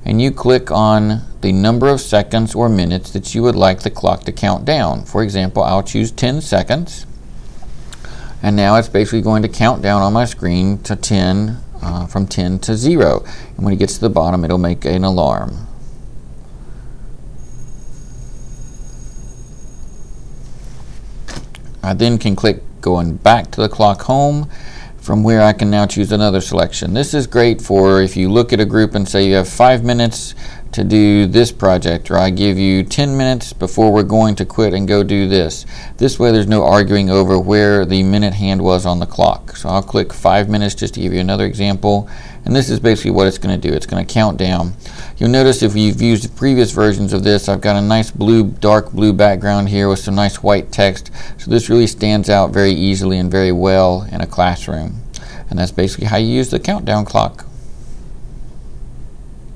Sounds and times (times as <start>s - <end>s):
Speech: 0.0s - 7.1s, 8.4s - 15.7s, 21.8s - 57.5s.